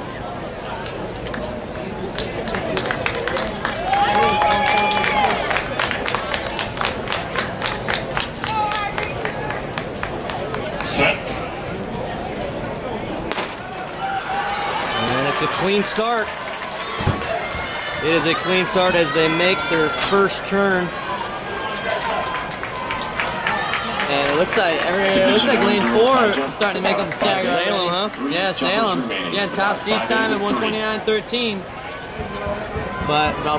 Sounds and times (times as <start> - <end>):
Run: 0.0 - 11.0, 14.0 - 18.7, 21.0 - 28.2, 31.9 - 33.5.